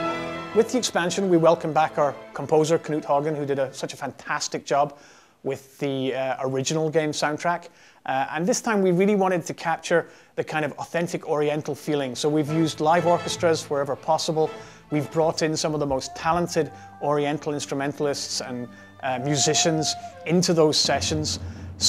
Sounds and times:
Music: 0:00.0 - 0:04.4, 0:11.9 - 0:21.8
Speech: 0:00.6 - 0:21.8.

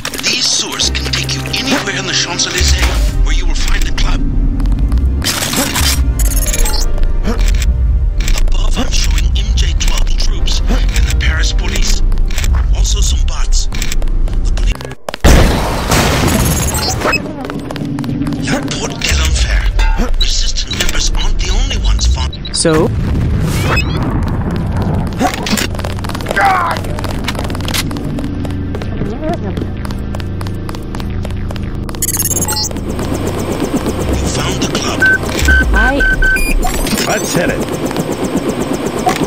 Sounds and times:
Run: 0:13.5 - 0:15.2, 0:17.0 - 0:19.0, 0:23.9 - 0:33.3.

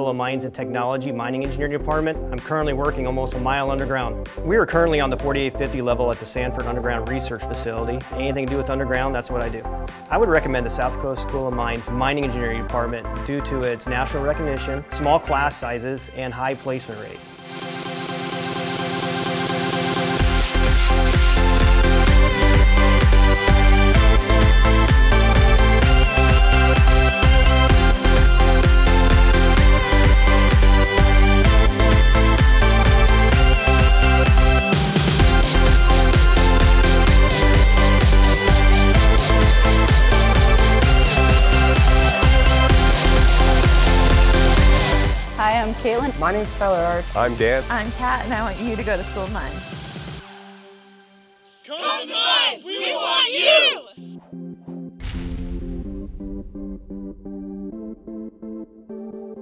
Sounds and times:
Speech: 0:00.0 - 0:17.2, 0:45.4 - 0:49.6, 0:51.7 - 0:53.9
Music: 0:00.0 - 0:59.4.

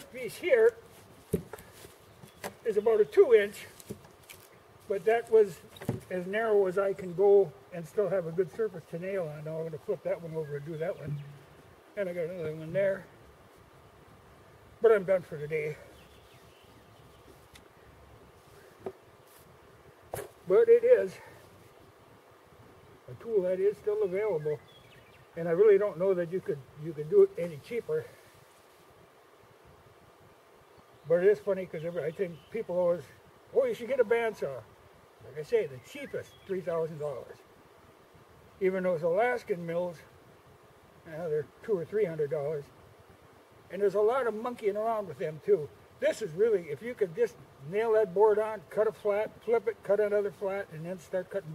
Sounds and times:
Speech: 0:00.0 - 0:00.8, 0:02.6 - 0:03.8, 0:04.9 - 0:11.3, 0:12.0 - 0:13.1, 0:14.8 - 0:15.9, 0:20.5 - 0:21.3, 0:23.1 - 0:24.6, 0:25.4 - 0:28.2, 0:31.1 - 0:34.6, 0:35.2 - 0:37.4, 0:38.6 - 0:40.1, 0:41.0 - 0:42.7, 0:43.7 - 0:51.5.

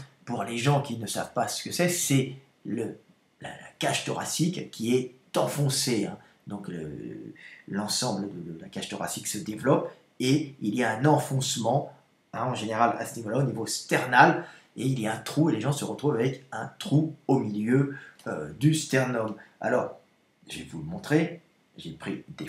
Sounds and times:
Speech: 0:00.0 - 0:22.4.

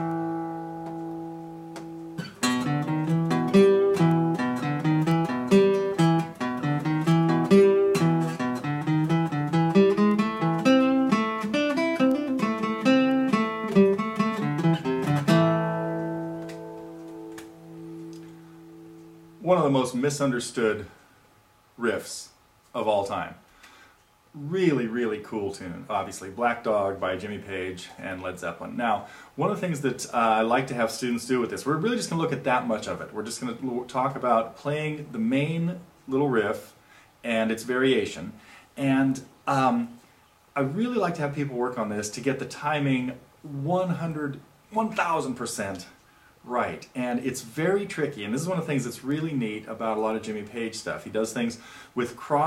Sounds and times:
Music: 0:00.0 - 0:19.4
Speech: 0:19.4 - 0:21.0, 0:21.8 - 0:23.4, 0:24.4 - 0:40.0, 0:40.6 - 0:52.4.

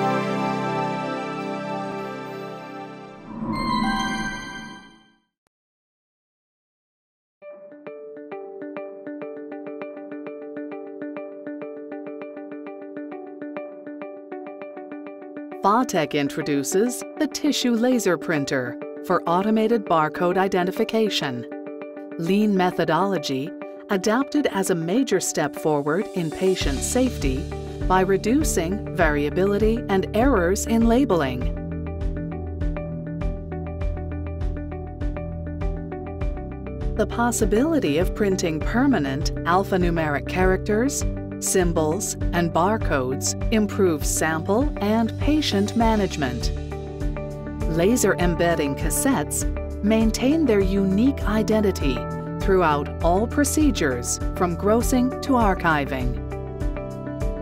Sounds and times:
Music: 0:00.0 - 0:05.4, 0:07.4 - 0:57.4
Speech: 0:15.6 - 0:21.5, 0:22.2 - 0:31.5, 0:37.0 - 0:46.5, 0:47.7 - 0:56.2.

